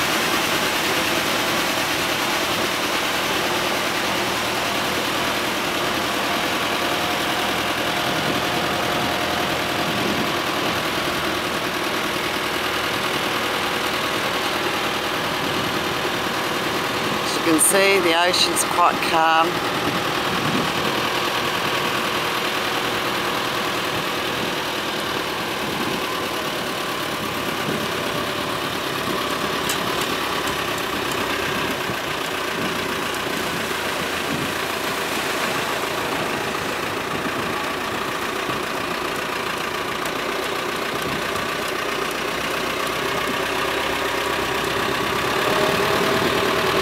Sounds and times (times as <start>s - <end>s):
Vehicle: 0.0s - 46.8s.